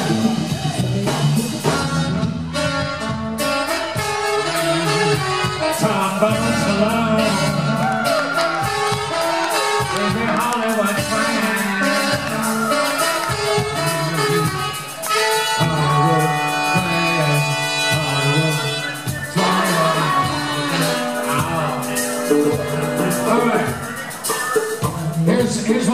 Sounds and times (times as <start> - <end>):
Singing: 0.0 - 2.4, 4.8 - 25.9
Drum: 0.0 - 25.9
Drum kit: 0.0 - 25.9
Rock and roll: 0.0 - 25.9.